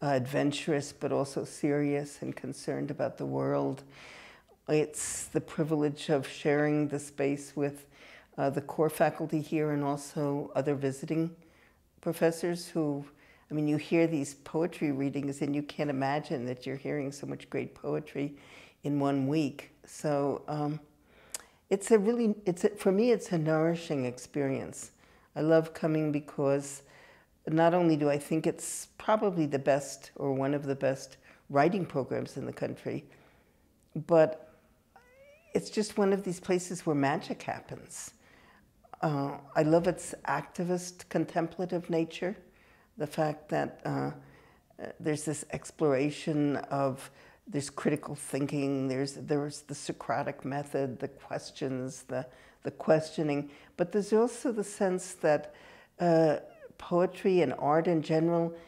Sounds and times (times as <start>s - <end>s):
Speech: 0.0s - 3.9s, 4.7s - 11.4s, 12.0s - 20.9s, 21.7s - 26.9s, 27.5s - 33.1s, 34.0s - 34.4s, 35.5s - 38.2s, 38.9s - 42.4s, 43.0s - 44.2s, 44.8s - 58.6s.